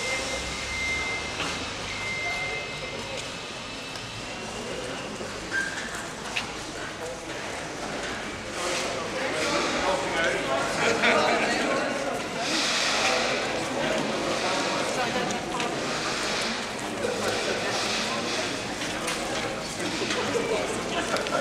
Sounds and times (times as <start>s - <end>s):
Speech: 4.4s - 21.4s.